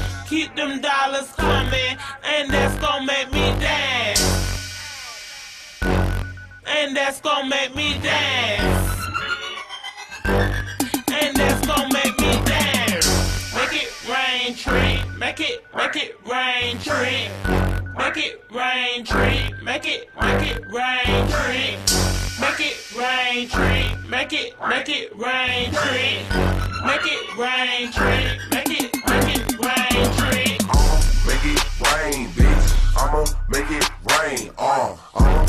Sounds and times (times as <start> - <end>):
Dance music: 0.0 - 35.4.